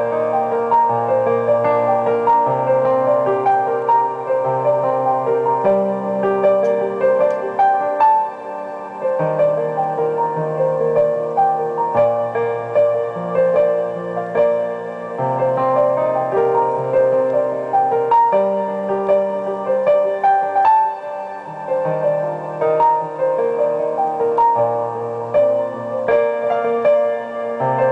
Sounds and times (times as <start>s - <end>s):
Music: 0.0s - 27.9s.